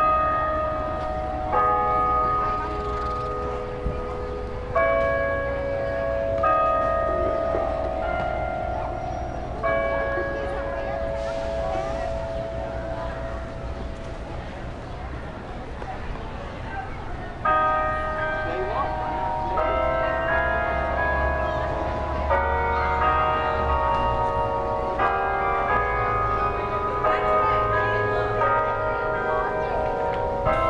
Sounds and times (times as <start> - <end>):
Speech: 8.6 - 24.1, 25.6 - 30.6.